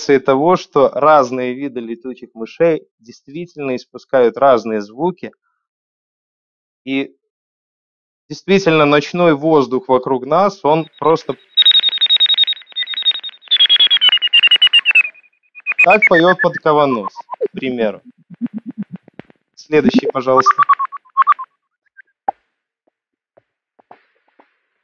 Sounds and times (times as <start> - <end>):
Speech: 0.0 - 5.4, 6.9 - 7.1, 8.3 - 11.4, 15.8 - 18.1, 19.6 - 20.6.